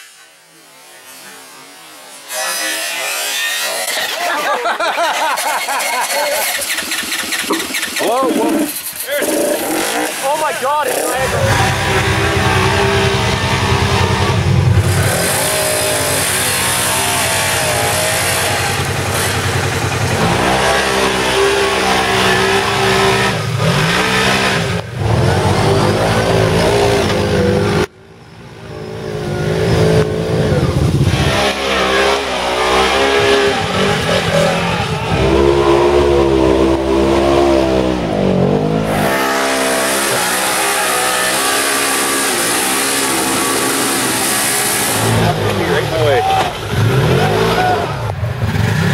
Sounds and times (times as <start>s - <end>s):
Outside, rural or natural: 0.0s - 48.9s
Car: 4.1s - 48.9s
Speech: 9.1s - 11.6s, 45.2s - 46.6s.